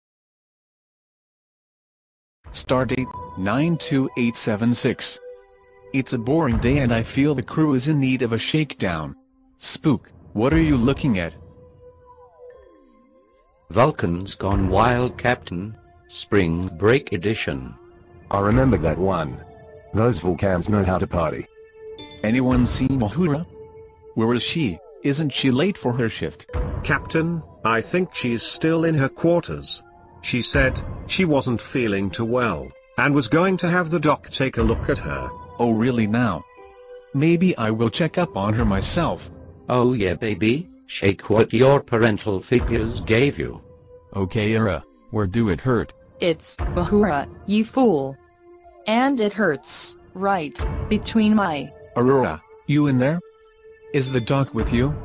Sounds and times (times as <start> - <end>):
Music: 2.4 - 55.0
Speech: 2.6 - 5.2, 6.0 - 11.4, 13.7 - 19.4, 20.0 - 21.5, 22.2 - 23.5, 24.2 - 36.4, 37.2 - 43.6, 44.2 - 48.2, 48.9 - 53.2, 54.0 - 55.0.